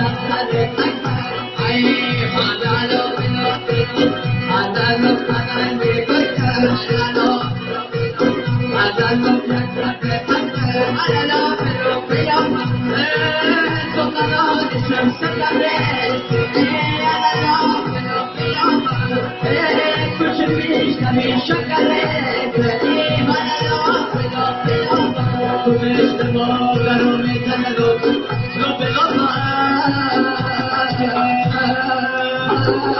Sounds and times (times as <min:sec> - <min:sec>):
Folk music: 0:00.0 - 0:32.9.